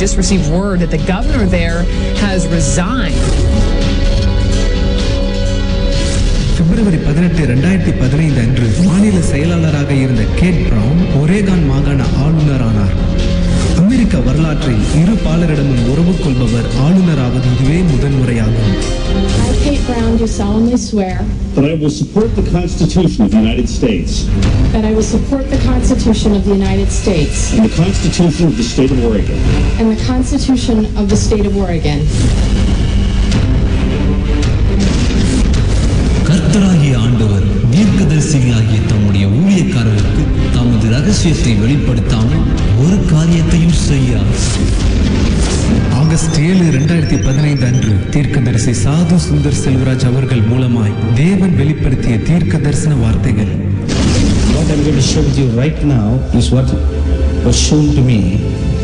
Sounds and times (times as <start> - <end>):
Music: 0.0 - 58.8
Speech: 13.8 - 32.1, 36.3 - 44.6, 45.9 - 53.6, 54.6 - 56.8.